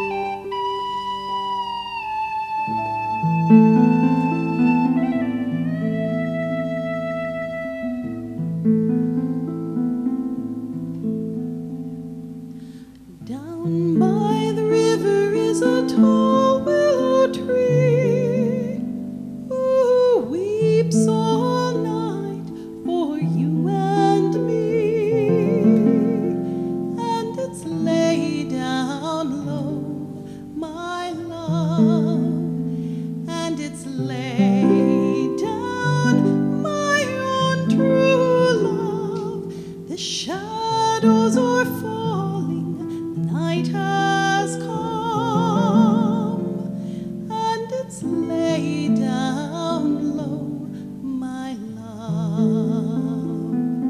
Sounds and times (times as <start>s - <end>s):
Harp: 0.0s - 53.8s
Pizzicato: 2.8s - 53.8s.